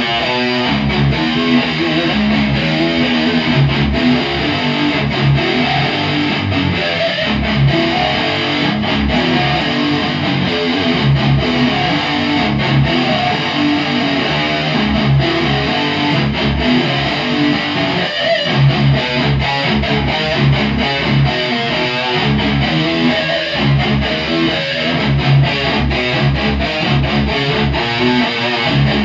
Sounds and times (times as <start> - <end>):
Electric guitar: 0.0 - 29.0.